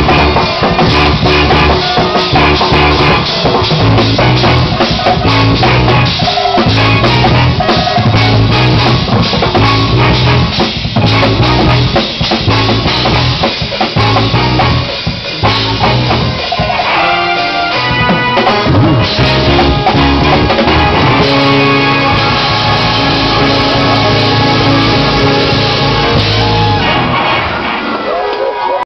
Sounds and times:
Music: 0.0s - 28.8s
Whoop: 26.2s - 28.8s.

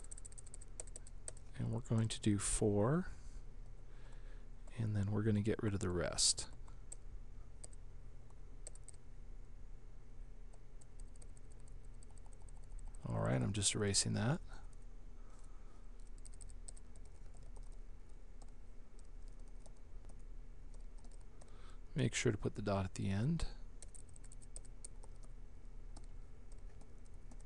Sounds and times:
Typing: 0.0s - 1.5s, 8.6s - 9.0s, 10.8s - 13.0s, 16.0s - 17.8s, 18.4s - 21.5s, 23.8s - 27.4s.

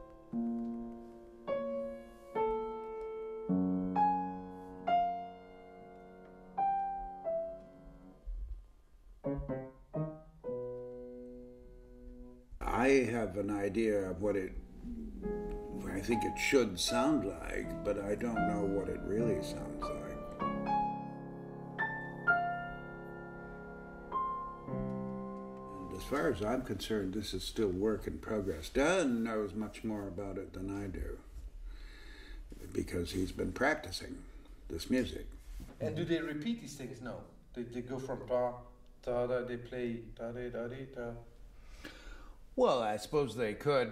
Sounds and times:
Music: 0.0s - 29.8s
Speech: 12.6s - 20.3s, 25.8s - 31.3s, 32.6s - 41.3s, 42.6s - 43.9s.

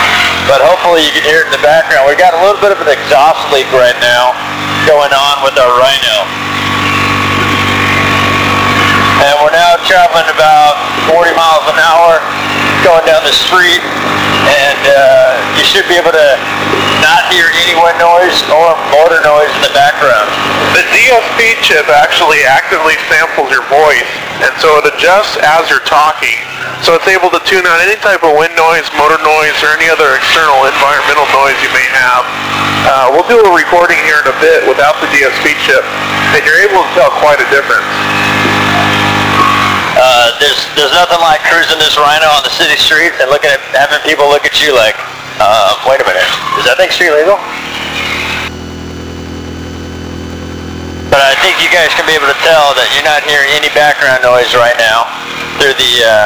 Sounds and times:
Male speech, man speaking: 0.4s - 6.3s, 9.2s - 16.4s, 17.0s - 38.0s, 40.0s - 47.5s, 51.1s - 56.2s.

